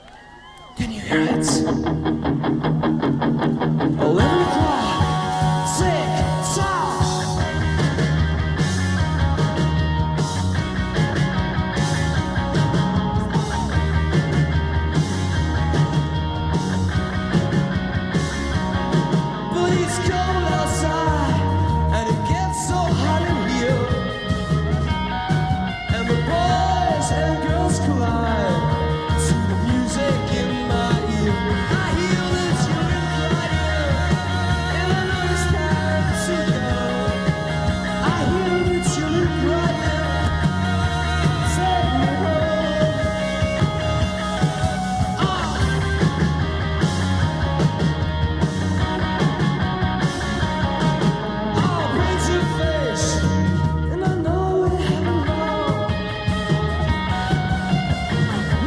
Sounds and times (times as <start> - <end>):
Music: 0.0 - 58.6
Singing: 4.0 - 7.6, 25.9 - 45.8.